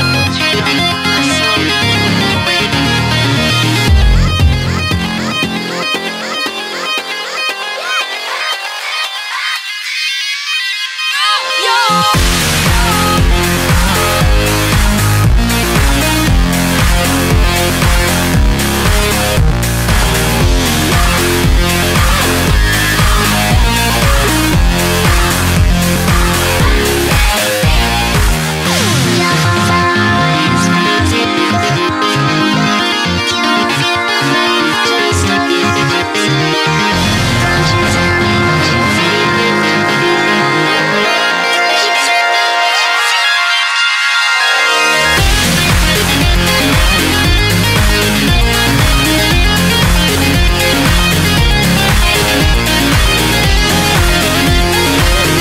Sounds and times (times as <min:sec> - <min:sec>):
Dance music: 0:00.0 - 0:55.4.